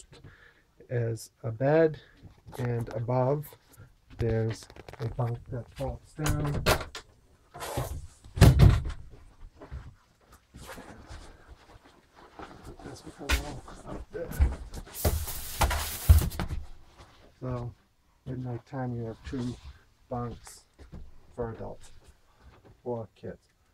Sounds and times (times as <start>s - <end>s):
Inside, small room: 0.0s - 23.7s
Speech: 0.8s - 3.6s, 4.2s - 6.7s, 12.8s - 14.6s, 17.4s - 20.7s, 21.4s - 21.9s, 22.8s - 23.5s.